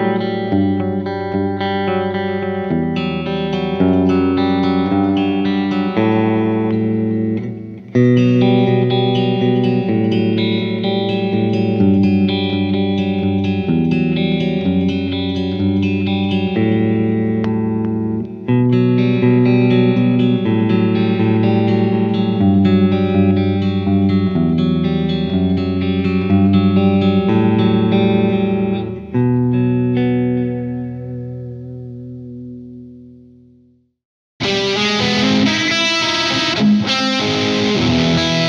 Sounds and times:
Electric guitar: 0.0 - 33.8, 34.4 - 38.4
Effects unit: 0.0 - 38.4.

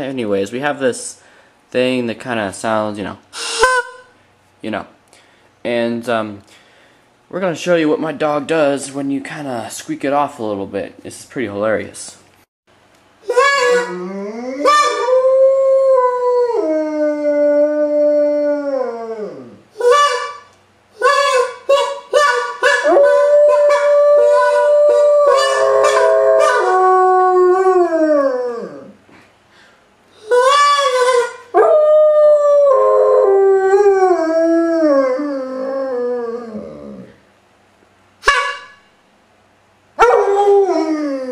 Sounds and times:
Howl: 13.3 - 20.3, 21.1 - 29.0, 30.3 - 37.2, 40.0 - 41.3.

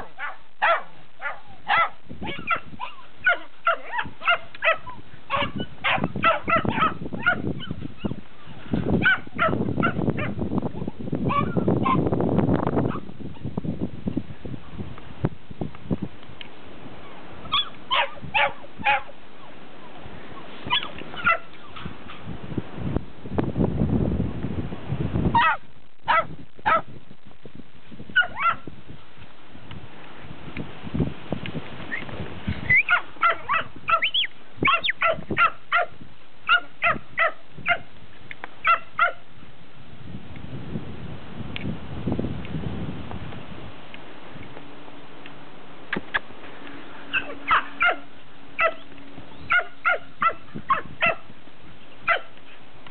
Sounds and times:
Dog: 0.0 - 8.2, 9.0 - 12.0, 17.5 - 19.1, 25.4 - 26.9, 28.2 - 28.6, 32.7 - 35.9, 36.5 - 37.8, 47.1 - 48.0, 48.6 - 48.8, 49.5 - 51.2, 52.1 - 52.3
Livestock, farm animals, working animals: 0.0 - 12.0, 16.9 - 22.3, 31.9 - 35.9, 36.5 - 39.2, 46.0 - 52.9.

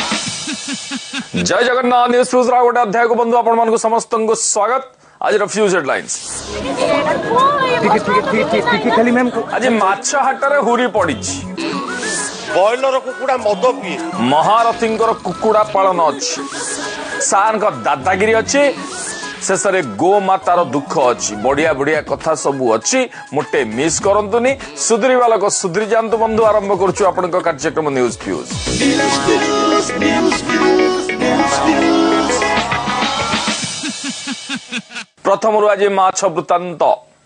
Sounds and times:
Music: 0.0 - 1.6, 6.2 - 34.8.

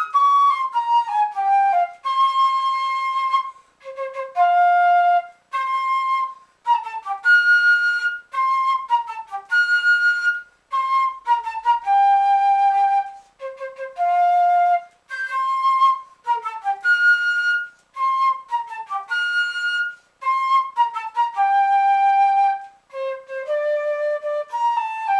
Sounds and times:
Flute: 0.0 - 25.1.

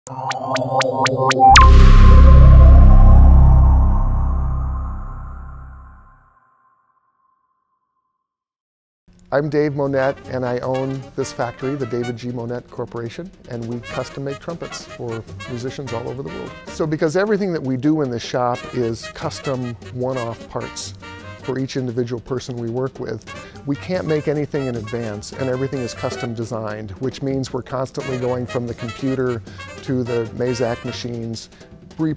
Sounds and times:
Speech: 9.3 - 32.1
Trumpet: 9.7 - 12.4, 13.8 - 16.8, 18.5 - 21.9, 23.2 - 26.7, 27.9 - 31.4.

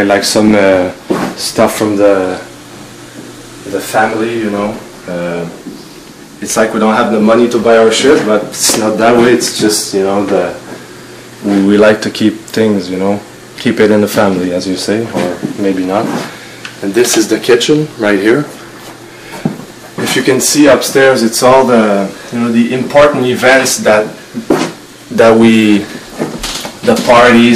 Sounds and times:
Speech: 0.0 - 2.5, 3.6 - 5.8, 6.4 - 10.6, 11.4 - 18.6, 20.0 - 24.2, 25.1 - 26.0, 26.8 - 27.5
Inside, small room: 0.0 - 27.5.

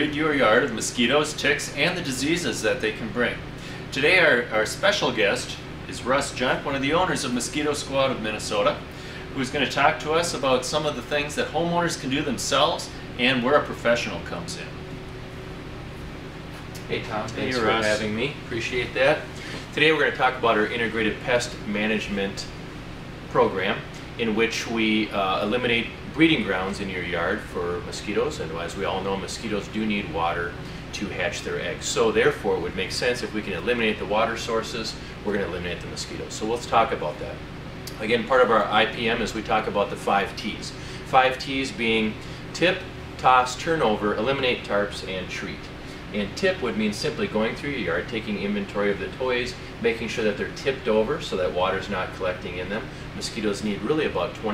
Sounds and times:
Speech: 0.0 - 14.8, 16.9 - 22.6, 23.3 - 54.5.

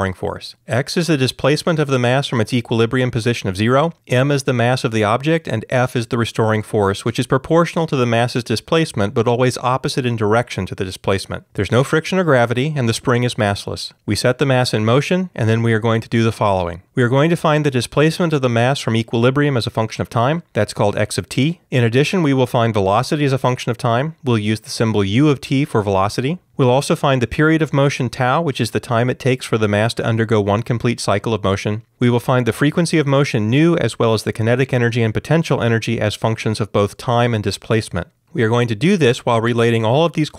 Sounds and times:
Speech: 0.0 - 40.3.

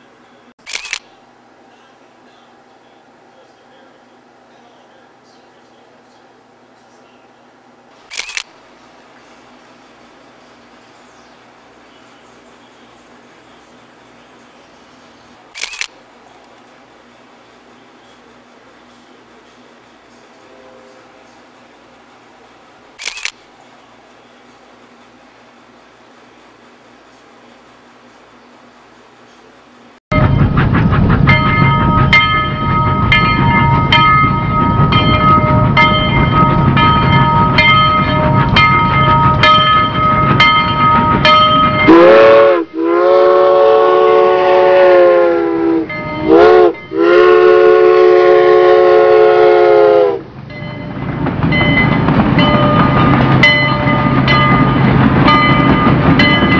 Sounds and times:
Steam whistle: 41.8 - 50.2.

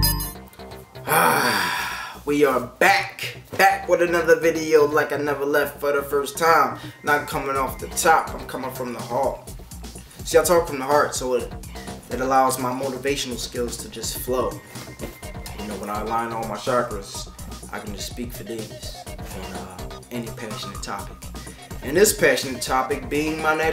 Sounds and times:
Music: 0.0 - 23.7
Speech: 2.3 - 9.4, 10.3 - 11.5, 12.1 - 14.6, 15.5 - 21.1, 21.8 - 23.7.

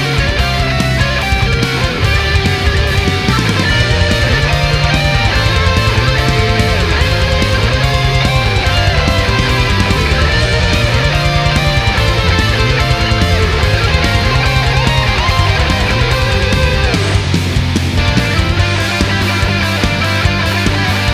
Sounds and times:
Bass guitar: 0.0 - 21.1
Electric guitar: 0.0 - 21.1
Strum: 0.0 - 21.1.

